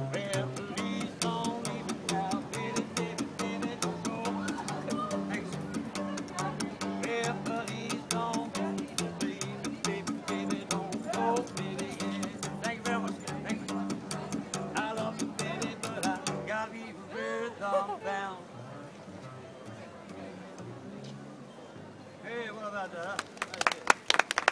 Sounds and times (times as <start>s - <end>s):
Double bass: 0.0s - 16.6s
Pizzicato: 0.6s - 12.5s.